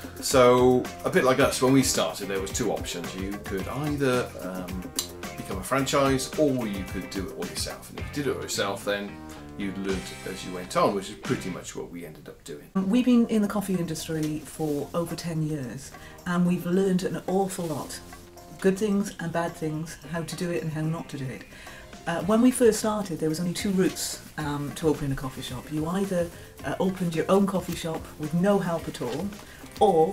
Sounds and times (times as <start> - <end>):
Speech: 0.2 - 4.8, 5.4 - 18.0, 22.1 - 30.1.